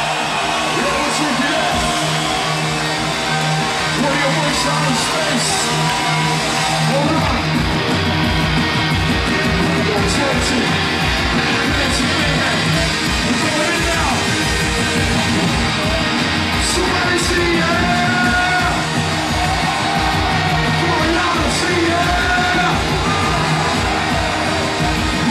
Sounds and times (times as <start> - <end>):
Music: 0.0 - 25.3
Speech: 0.8 - 1.8, 4.0 - 5.6, 6.9 - 7.4, 9.8 - 10.7, 11.6 - 14.2, 16.6 - 18.8, 20.8 - 22.8.